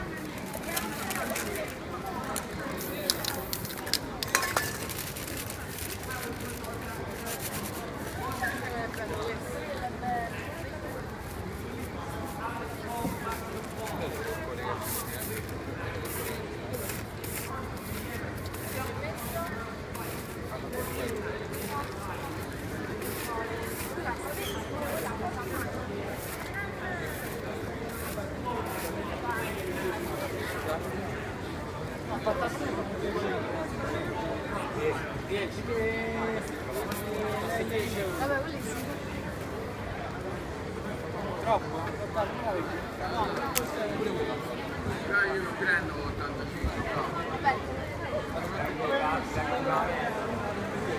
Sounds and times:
Speech: 0.0s - 50.9s.

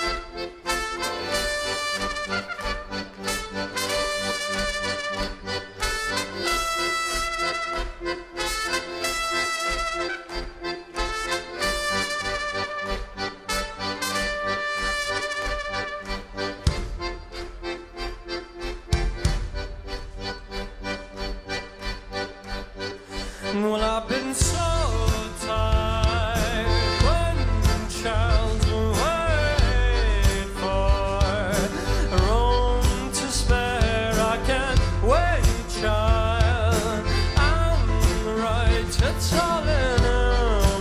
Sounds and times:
Music: 0.0s - 40.8s.

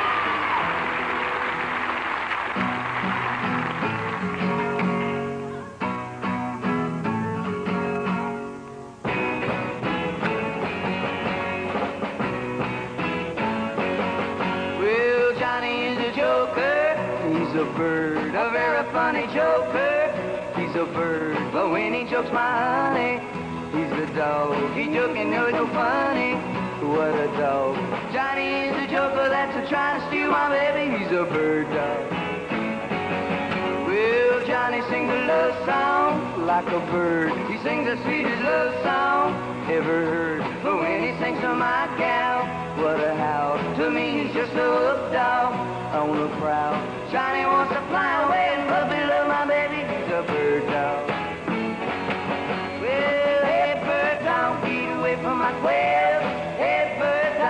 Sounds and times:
Music: 0.0s - 57.5s.

